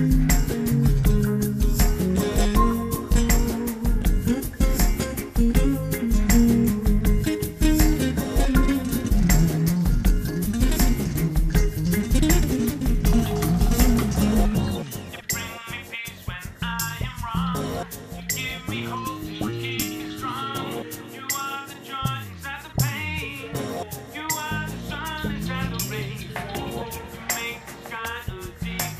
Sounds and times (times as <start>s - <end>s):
Music: 0.0s - 28.9s.